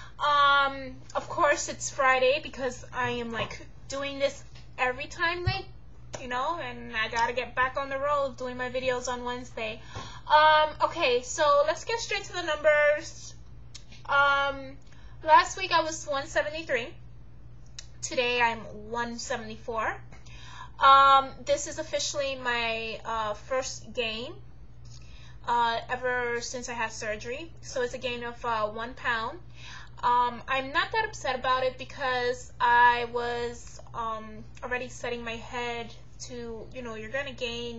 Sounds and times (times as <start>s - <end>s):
Speech: 0.2s - 13.4s, 14.1s - 17.0s, 18.0s - 20.1s, 20.8s - 24.4s, 25.5s - 29.4s, 30.0s - 37.7s.